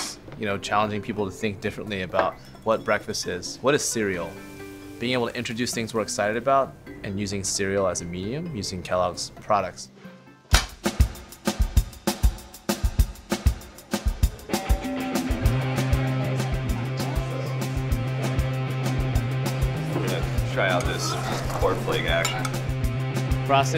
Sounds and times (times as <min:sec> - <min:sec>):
Speech: 0:00.0 - 0:04.4, 0:05.0 - 0:09.9, 0:19.9 - 0:22.4, 0:23.5 - 0:23.7
Music: 0:00.0 - 0:23.7.